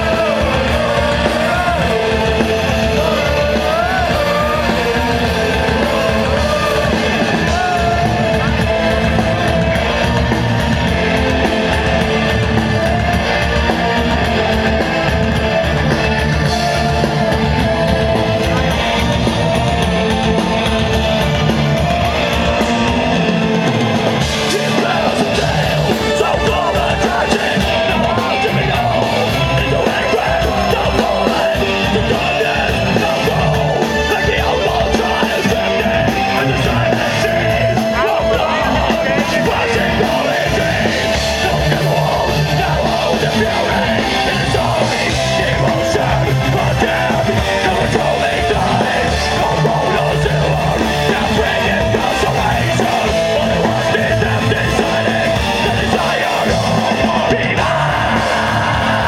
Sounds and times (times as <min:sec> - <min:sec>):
Music: 0:00.0 - 0:59.0.